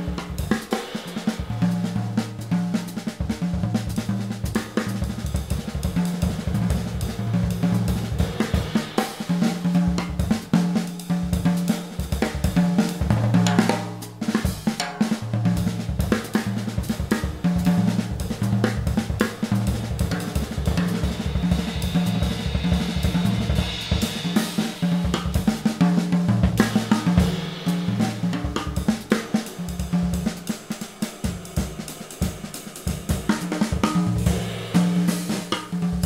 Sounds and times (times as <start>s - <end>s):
Drum: 0.0s - 36.0s
Drum kit: 0.0s - 36.0s.